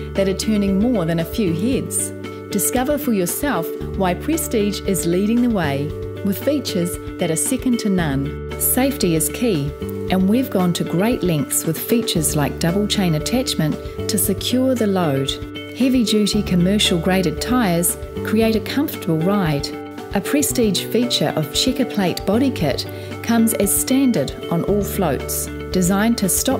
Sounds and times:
Music: 0.0 - 26.5
Speech: 0.2 - 26.5.

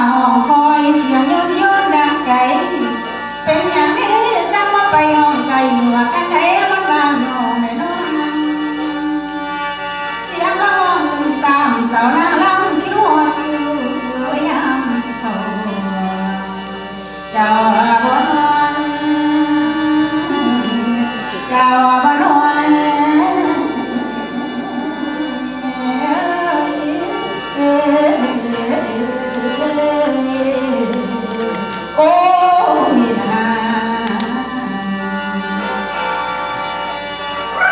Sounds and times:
Music: 0.0 - 37.7.

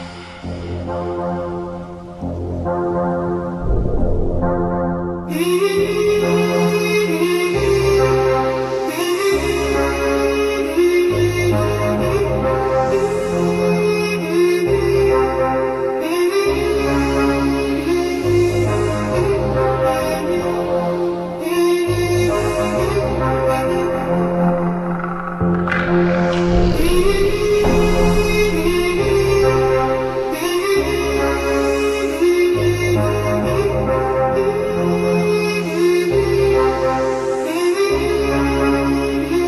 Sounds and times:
Techno: 0.0 - 39.4.

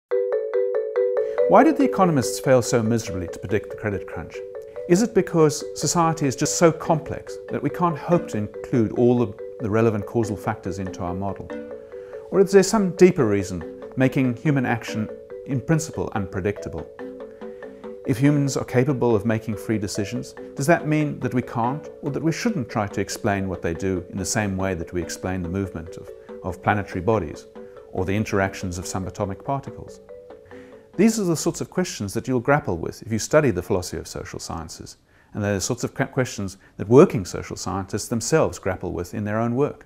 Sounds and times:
Music: 0.1 - 31.7
Speech: 1.5 - 11.6, 12.3 - 16.9, 18.1 - 30.0, 31.0 - 39.8.

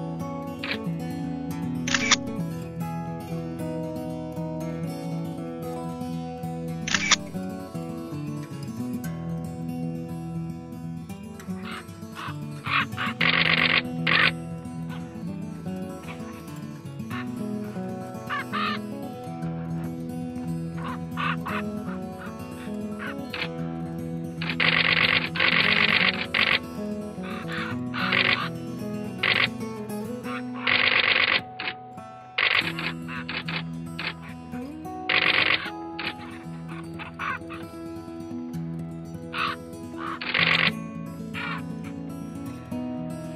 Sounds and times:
Music: 0.0 - 43.3
Bird: 6.9 - 7.4, 11.4 - 15.2, 16.0 - 23.6, 24.4 - 31.8, 32.4 - 34.4, 35.1 - 37.8, 39.3 - 41.8.

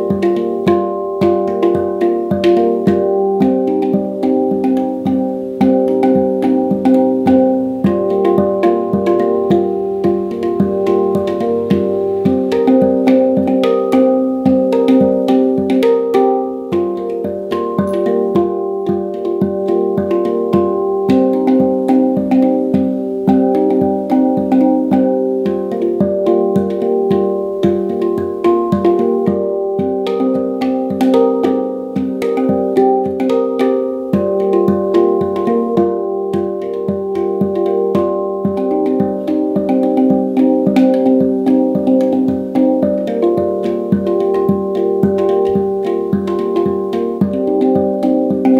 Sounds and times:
Music: 0.0 - 48.5.

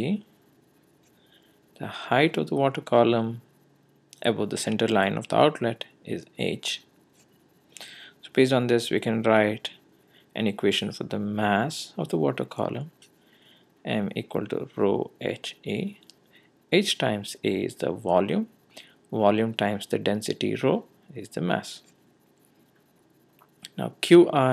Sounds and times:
Speech: 0.0 - 0.3, 1.8 - 3.5, 4.2 - 6.9, 8.2 - 9.8, 10.4 - 13.0, 13.9 - 16.0, 16.8 - 18.5, 19.1 - 21.9, 23.7 - 24.5.

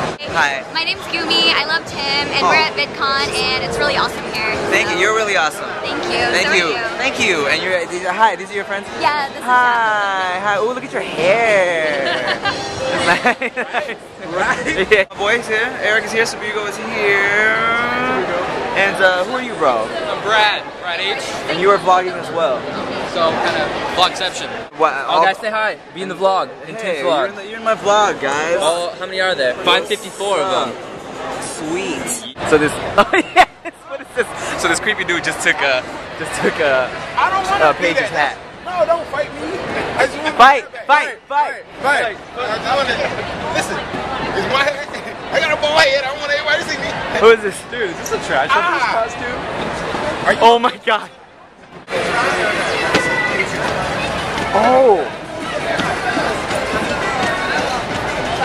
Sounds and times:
Inside, public space: 0.0 - 58.4.

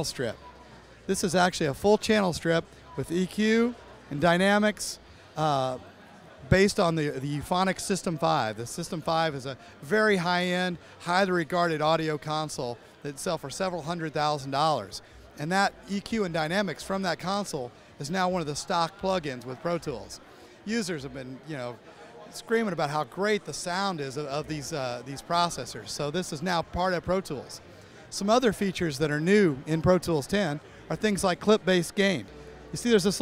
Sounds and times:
Speech: 0.0 - 33.2.

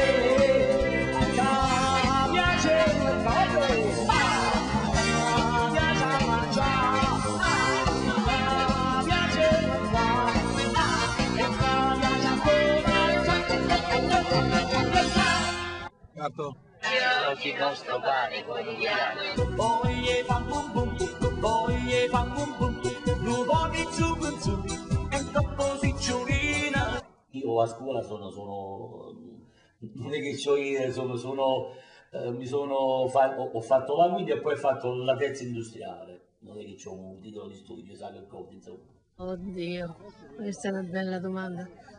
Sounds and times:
Music: 0.0 - 16.0, 19.0 - 27.1
Speech: 16.1 - 16.6, 27.4 - 41.7.

